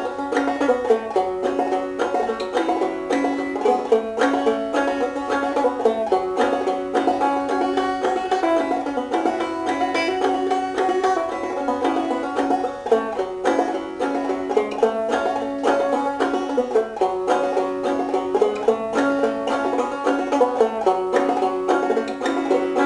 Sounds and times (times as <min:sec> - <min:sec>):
Banjo: 0:00.0 - 0:22.8.